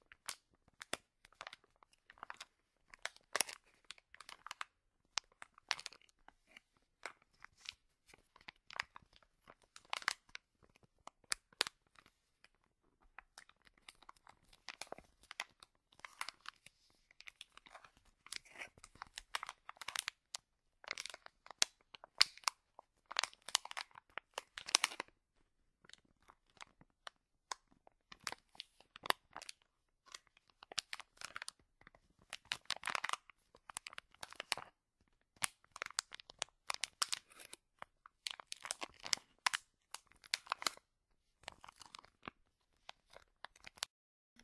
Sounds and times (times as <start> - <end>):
Crumpling, crinkling: 0.0 - 44.4.